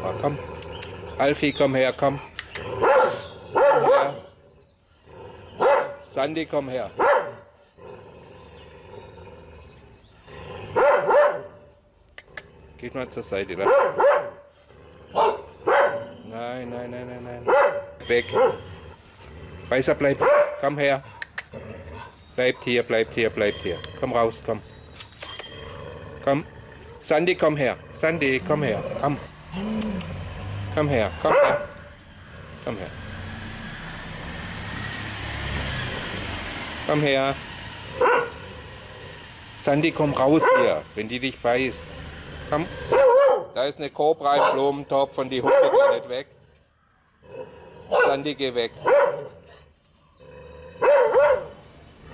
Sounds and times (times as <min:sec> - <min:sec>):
Dog: 0:02.8 - 0:04.2, 0:07.0 - 0:07.4, 0:10.8 - 0:11.5, 0:13.6 - 0:14.4, 0:15.2 - 0:16.1, 0:17.5 - 0:18.6, 0:20.2 - 0:21.4, 0:31.3 - 0:31.8, 0:40.4 - 0:40.8, 0:42.9 - 0:43.5, 0:44.3 - 0:44.7, 0:45.4 - 0:46.1, 0:47.9 - 0:49.6, 0:50.8 - 0:51.6
Speech: 0:12.8 - 0:13.7, 0:16.3 - 0:18.4, 0:22.4 - 0:24.6, 0:26.2 - 0:29.3, 0:32.6 - 0:33.0, 0:36.9 - 0:37.4, 0:39.6 - 0:42.7, 0:43.6 - 0:46.3, 0:48.0 - 0:49.7.